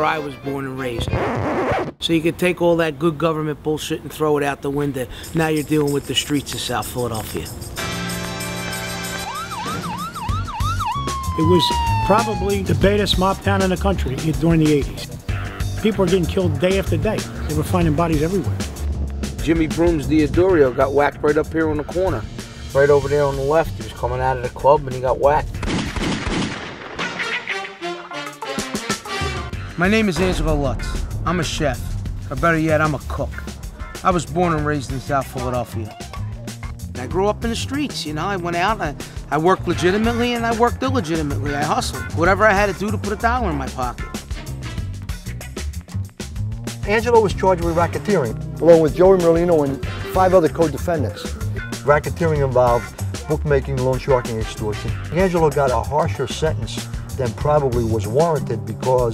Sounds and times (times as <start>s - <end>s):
Speech: 0.0s - 1.2s, 2.0s - 7.5s, 11.4s - 15.1s, 15.8s - 18.5s, 19.4s - 22.2s, 22.8s - 25.5s, 29.8s - 33.4s, 34.0s - 36.0s, 37.0s - 44.0s, 46.8s - 59.1s
Music: 0.0s - 1.9s, 5.1s - 25.7s, 27.0s - 59.1s
Gunshot, gunfire: 25.6s - 27.6s.